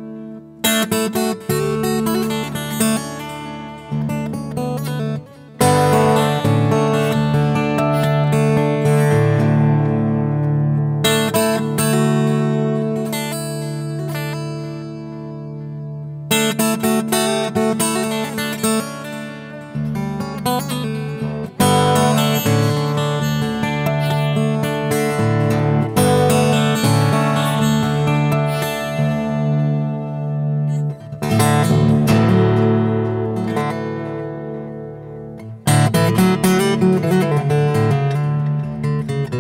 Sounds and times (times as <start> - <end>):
Music: 0.0 - 39.4.